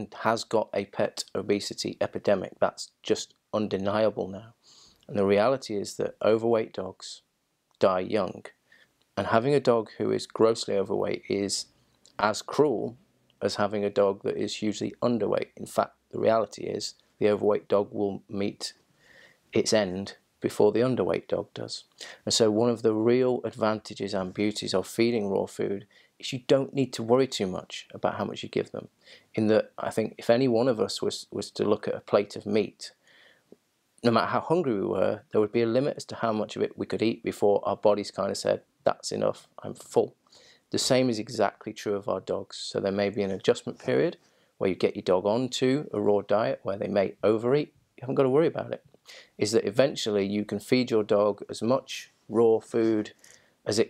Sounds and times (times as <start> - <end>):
Speech: 0.0 - 8.6, 9.2 - 18.8, 19.5 - 33.0, 34.0 - 53.9.